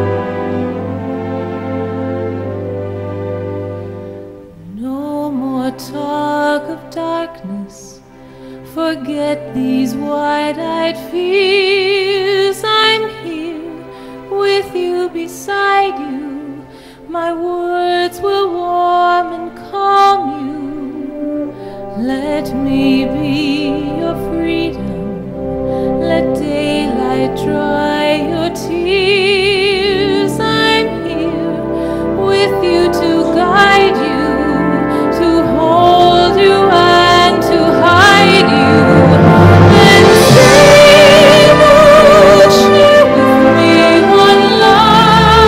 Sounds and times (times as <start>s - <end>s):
Opera: 0.0s - 45.4s.